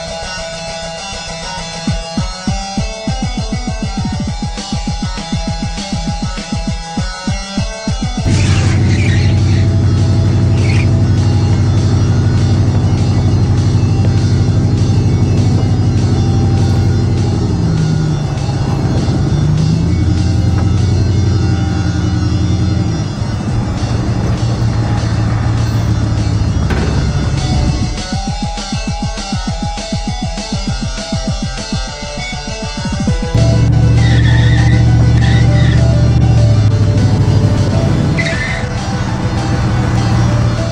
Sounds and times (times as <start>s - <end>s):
Car: 0.0s - 40.7s
Music: 0.0s - 40.7s.